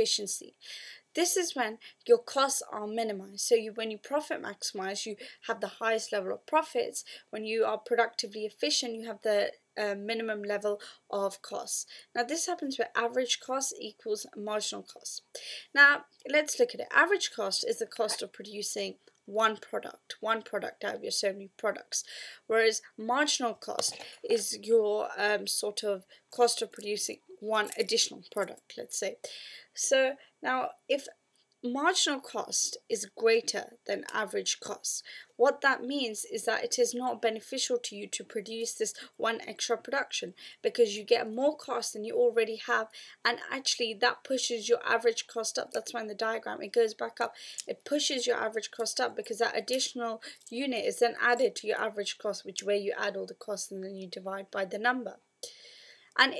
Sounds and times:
Speech: 0.0 - 0.6, 1.2 - 29.2, 29.8 - 31.1, 31.7 - 55.2.

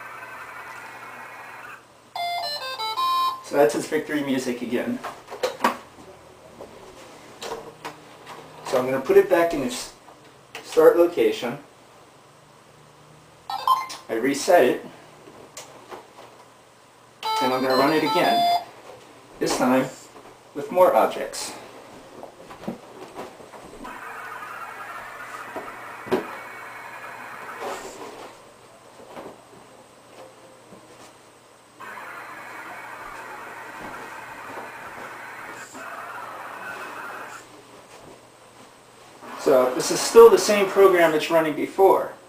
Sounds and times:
Inside, small room: 0.0 - 42.2
Music: 2.2 - 3.4
Speech: 3.5 - 5.1, 8.7 - 10.0, 10.6 - 11.7, 14.1 - 15.0, 17.4 - 18.4, 19.4 - 21.6, 39.4 - 42.2.

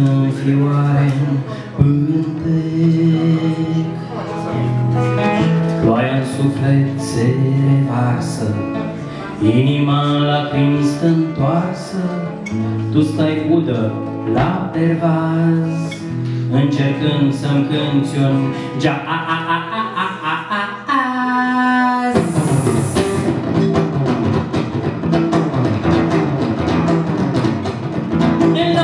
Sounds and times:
Music: 0.0 - 28.8.

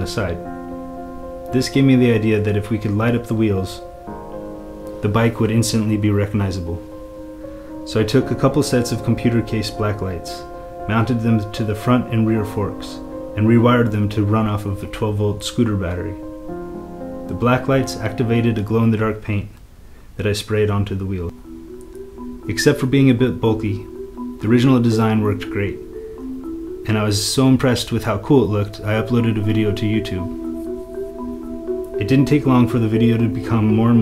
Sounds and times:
Speech: 0.0 - 0.4, 1.5 - 3.8, 5.0 - 6.8, 7.9 - 16.2, 17.3 - 19.6, 20.2 - 21.3, 22.5 - 25.8, 26.9 - 30.3, 32.0 - 34.0
Music: 0.0 - 19.3, 21.3 - 34.0.

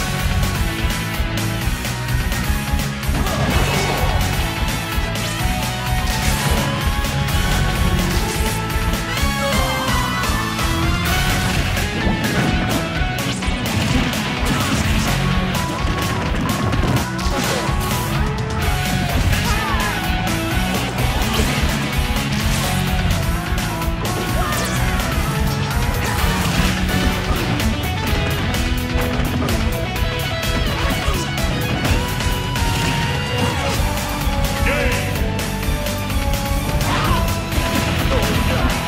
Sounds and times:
Music: 0.0 - 38.8.

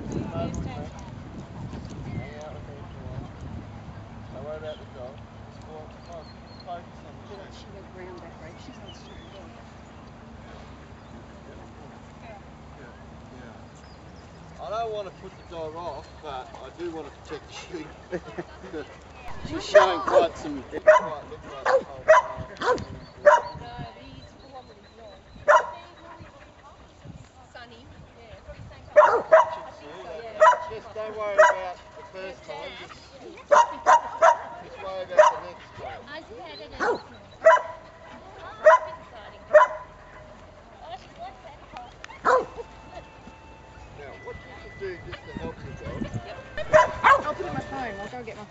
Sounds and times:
Dog: 19.6 - 23.7, 24.7 - 26.2, 29.0 - 29.8, 30.4 - 32.2, 32.8 - 36.1, 36.7 - 40.4, 42.2 - 42.7, 46.6 - 47.4.

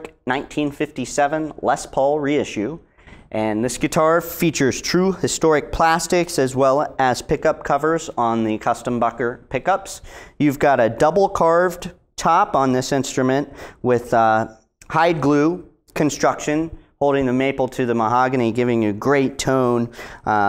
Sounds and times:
Speech: 0.0 - 20.4.

